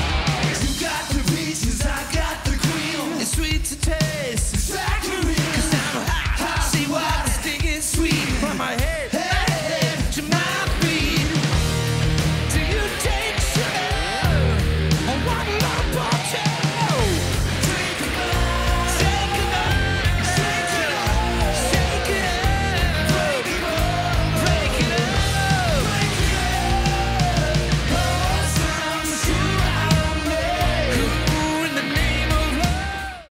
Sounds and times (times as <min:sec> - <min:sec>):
Music: 0:00.0 - 0:33.3.